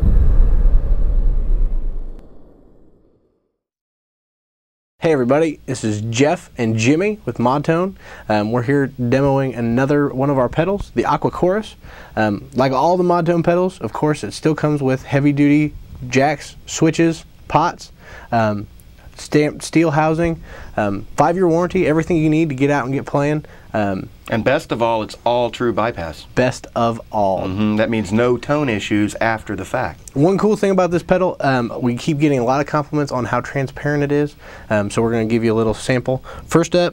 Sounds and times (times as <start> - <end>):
Speech: 5.0 - 36.9.